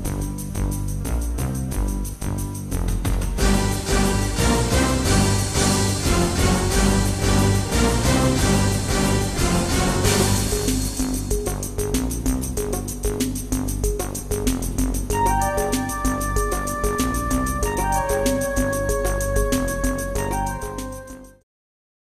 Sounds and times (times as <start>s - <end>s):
Music: 0.0s - 21.5s.